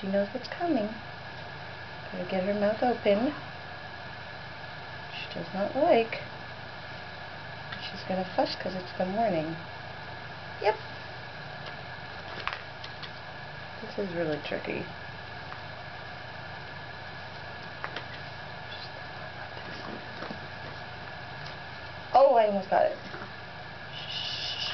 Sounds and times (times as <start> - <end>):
Speech: 0.0 - 1.0, 2.1 - 3.4, 5.1 - 6.3, 7.8 - 9.6, 10.6 - 10.8, 13.8 - 14.9, 22.2 - 23.0.